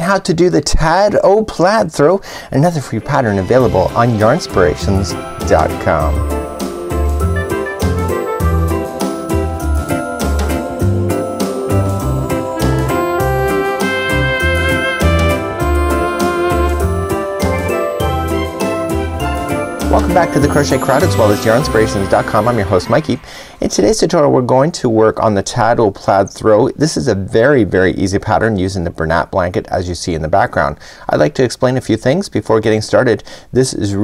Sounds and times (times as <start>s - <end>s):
Music: 2.9s - 23.8s.